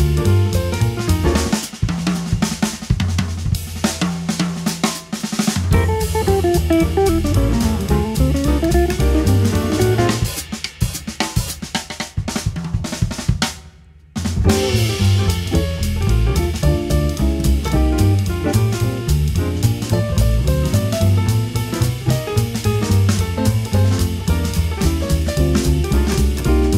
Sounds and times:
Bass drum: 0.0s - 13.6s, 14.2s - 26.7s
Cymbal: 0.0s - 13.7s, 14.3s - 26.7s
Drum kit: 0.0s - 26.7s.

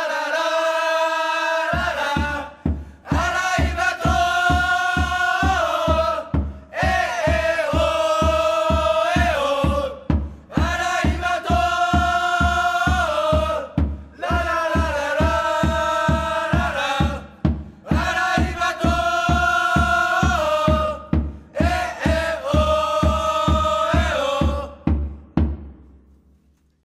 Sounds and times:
Music: 1.7s - 26.8s.

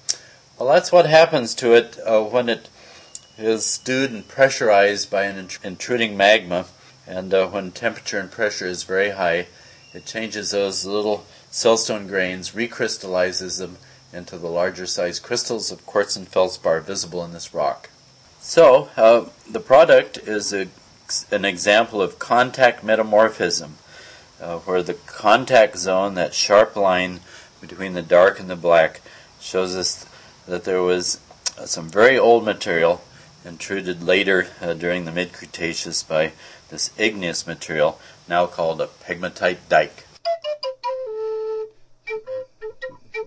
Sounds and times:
Speech: 0.6s - 2.7s, 3.4s - 23.8s, 24.4s - 40.1s
Music: 40.2s - 43.2s.

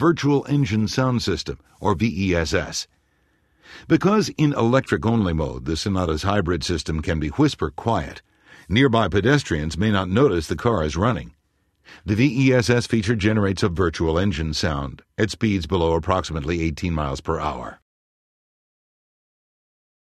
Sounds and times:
Speech: 0.0s - 2.9s, 3.8s - 17.9s.

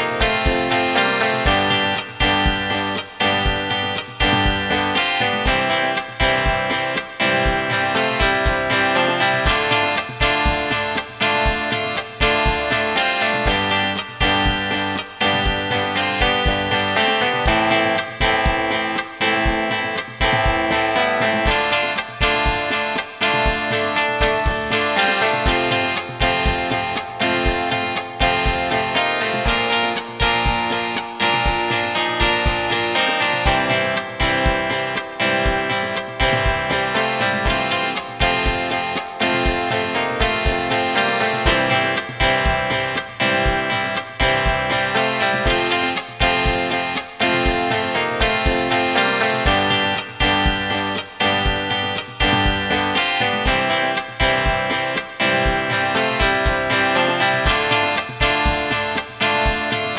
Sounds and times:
Steel guitar, slide guitar: 0.0s - 59.9s.

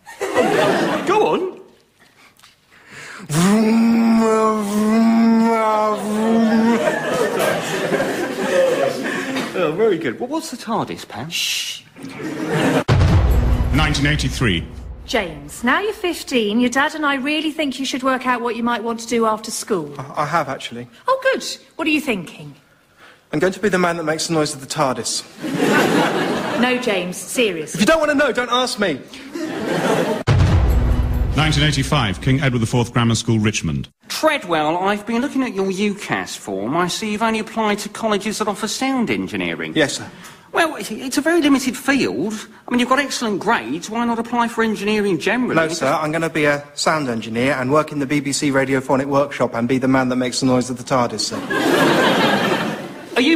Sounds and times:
Music: 12.9s - 15.0s, 30.3s - 32.5s.

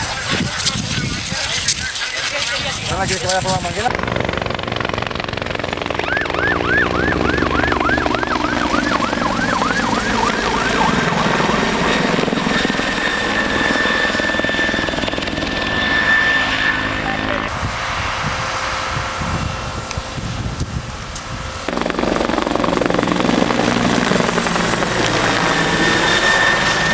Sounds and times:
Wind noise (microphone): 0.0s - 4.1s, 17.5s - 23.5s.

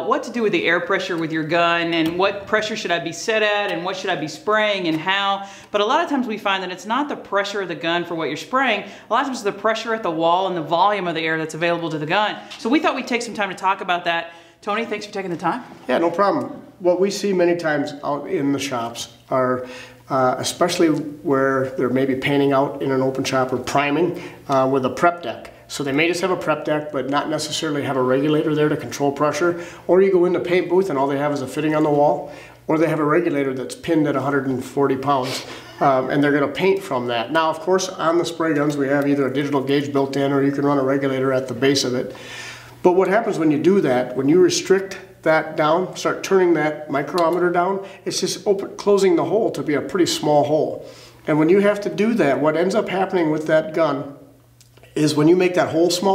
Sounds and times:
Speech: 0.0s - 42.1s, 42.9s - 54.2s, 55.0s - 56.1s.

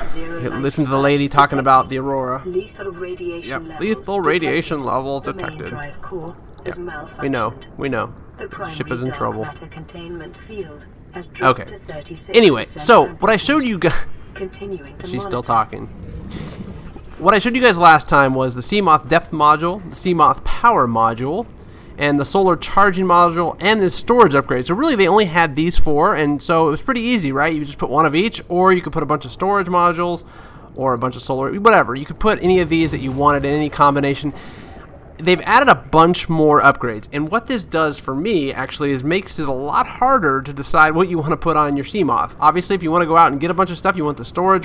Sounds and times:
Speech: 0.0s - 15.9s, 30.8s - 34.4s, 35.2s - 44.6s.

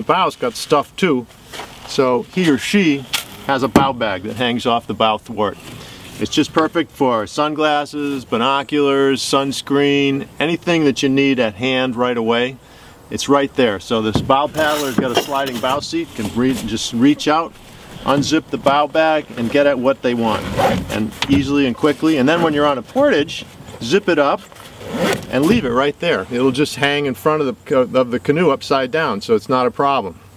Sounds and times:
Speech: 0.0s - 1.3s, 1.9s - 5.6s, 6.2s - 24.4s, 25.3s - 30.2s.

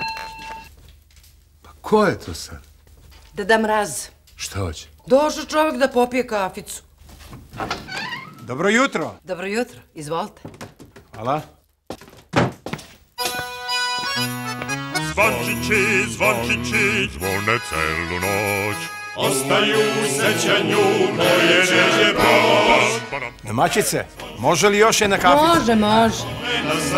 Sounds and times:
Christian music: 13.2s - 26.9s
Christmas music: 13.2s - 26.9s.

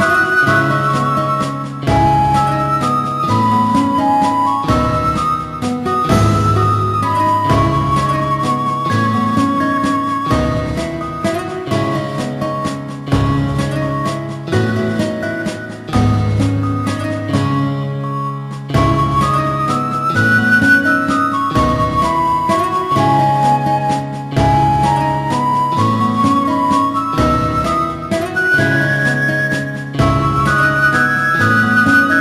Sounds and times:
Exciting music: 0.0s - 32.2s.

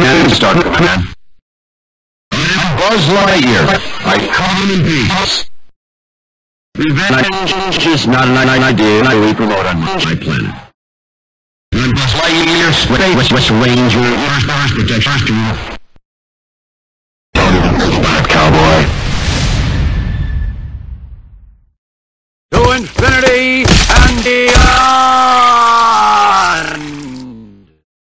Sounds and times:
Speech: 0.0s - 1.2s, 2.3s - 5.5s, 6.8s - 10.8s, 11.8s - 15.7s, 17.4s - 18.9s, 22.5s - 27.8s.

